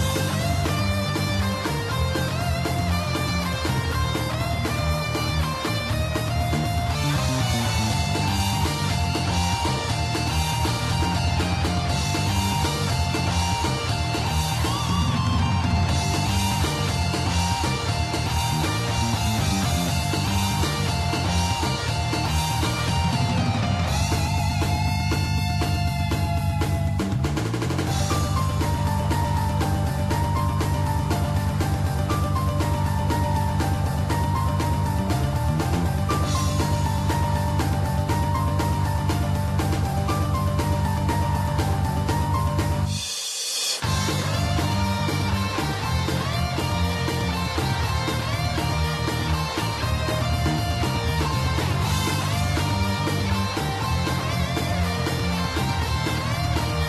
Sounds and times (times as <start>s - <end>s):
Music: 0.0s - 56.8s.